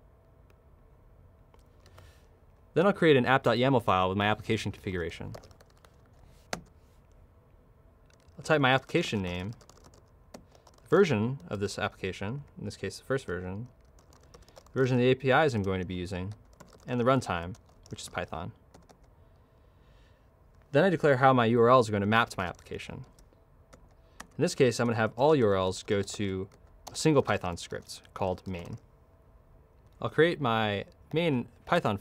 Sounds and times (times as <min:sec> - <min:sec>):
Speech: 0:02.8 - 0:05.4, 0:08.4 - 0:09.6, 0:10.9 - 0:13.7, 0:14.8 - 0:18.6, 0:20.7 - 0:23.1, 0:24.4 - 0:28.8, 0:30.0 - 0:32.0.